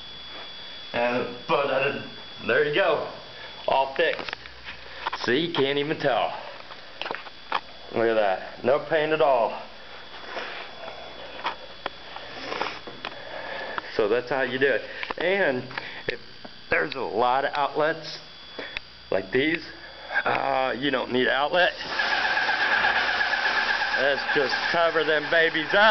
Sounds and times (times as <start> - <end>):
Speech: 1.0 - 4.3, 5.2 - 6.5, 7.9 - 9.7, 13.9 - 18.3, 19.1 - 21.8, 24.0 - 25.9.